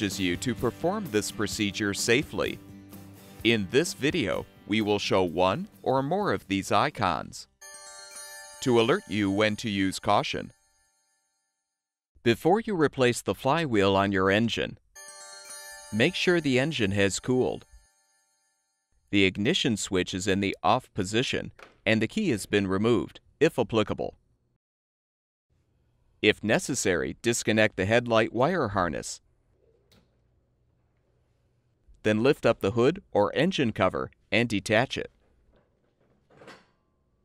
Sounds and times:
Speech: 0:00.0 - 0:02.6, 0:03.5 - 0:07.5, 0:08.6 - 0:10.5, 0:12.3 - 0:14.8, 0:16.0 - 0:17.7, 0:19.2 - 0:24.2, 0:26.2 - 0:29.2, 0:32.0 - 0:35.2.

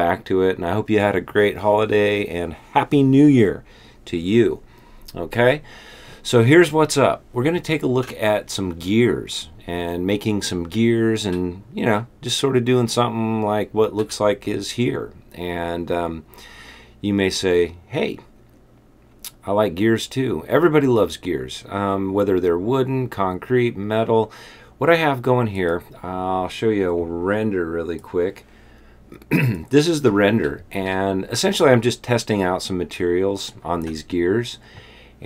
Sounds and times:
Speech: 0:00.0 - 0:16.3, 0:17.0 - 0:18.3, 0:19.3 - 0:28.4, 0:29.2 - 0:34.6.

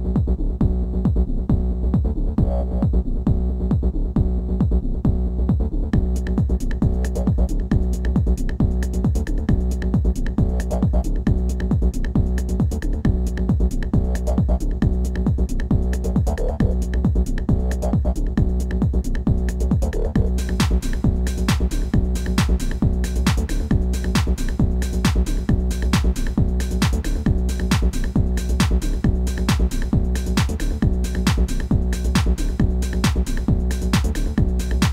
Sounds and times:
Exciting music: 0:19.8 - 0:34.9.

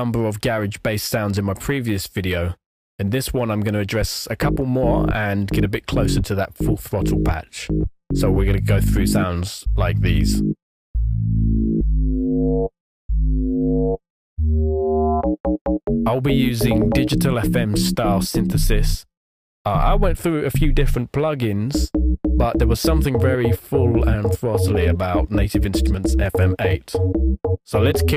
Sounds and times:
Speech: 0:00.0 - 0:10.4, 0:16.1 - 0:19.1, 0:19.7 - 0:27.0, 0:27.7 - 0:28.1.

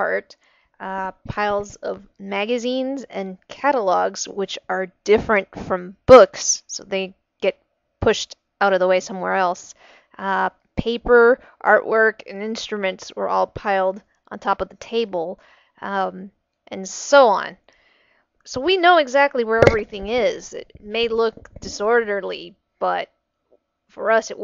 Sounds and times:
Female speech, woman speaking: 0:00.0 - 0:07.1, 0:08.0 - 0:17.6, 0:18.5 - 0:23.1, 0:24.0 - 0:24.4.

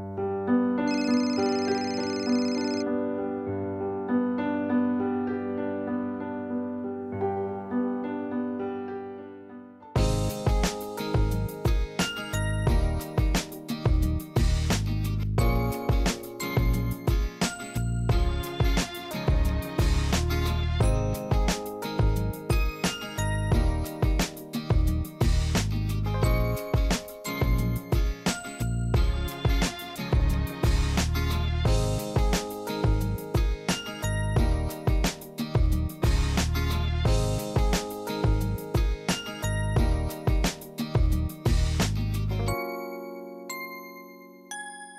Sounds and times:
Music: 0:00.0 - 0:44.9.

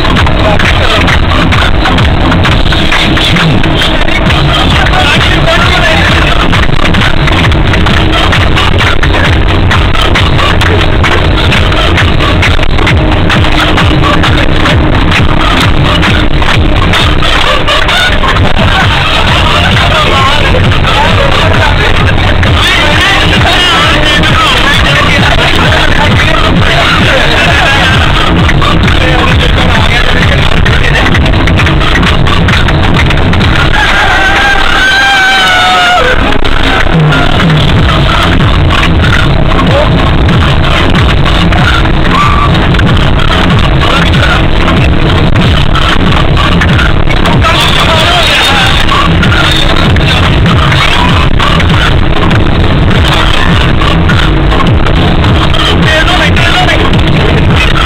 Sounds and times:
Music: 0:00.0 - 0:57.8.

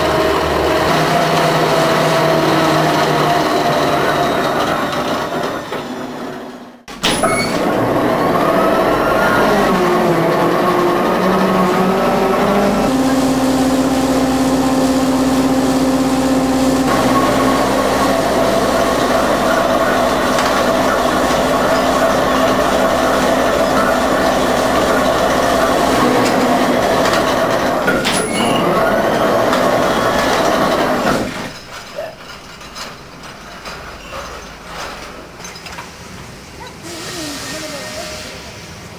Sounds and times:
Train: 0:00.0 - 0:38.9.

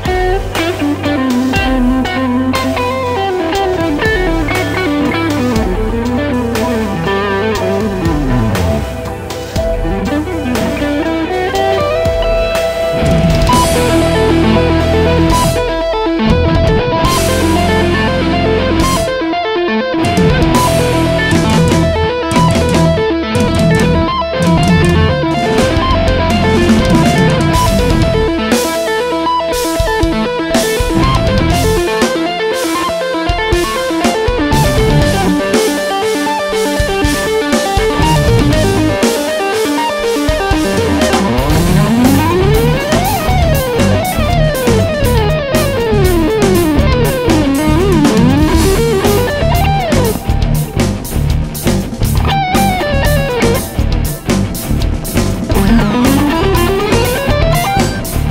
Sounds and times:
Electric guitar: 0:00.0 - 0:58.3
Heavy metal: 0:00.0 - 0:58.3.

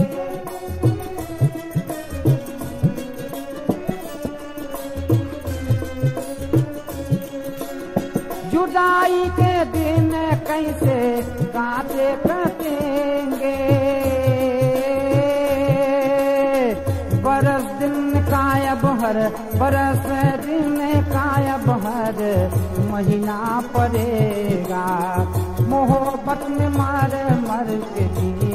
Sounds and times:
Middle Eastern music: 0:00.0 - 0:28.5
Singing: 0:08.4 - 0:28.5.

